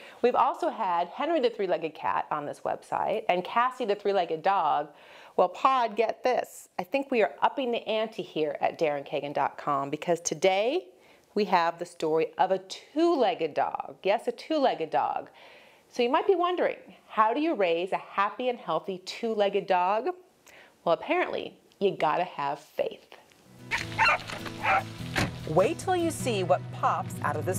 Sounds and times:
Speech: 0.2 - 15.3, 16.0 - 20.2, 20.9 - 23.2, 25.5 - 27.5
Music: 23.5 - 27.5
Bow-wow: 23.7 - 24.9.

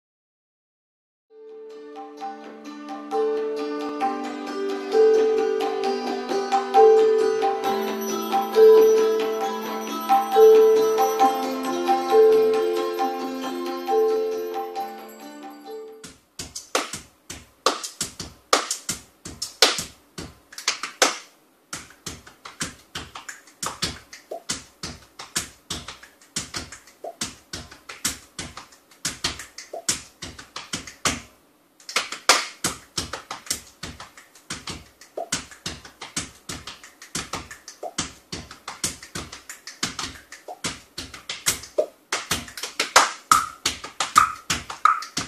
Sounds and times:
Percussion: 3.1 - 45.2.

